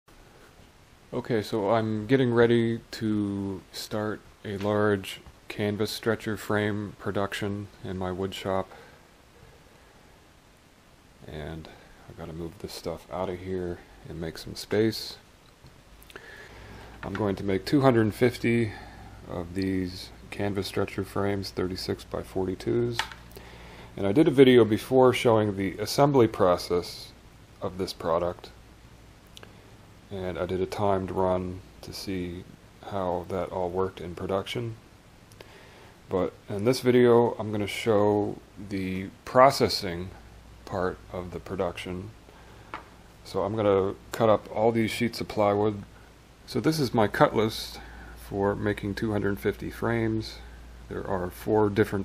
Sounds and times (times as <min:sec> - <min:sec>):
Speech: 0:01.1 - 0:08.8, 0:11.2 - 0:15.3, 0:17.0 - 0:23.1, 0:24.0 - 0:28.6, 0:30.1 - 0:34.8, 0:36.1 - 0:42.2, 0:43.2 - 0:45.9, 0:46.5 - 0:52.0.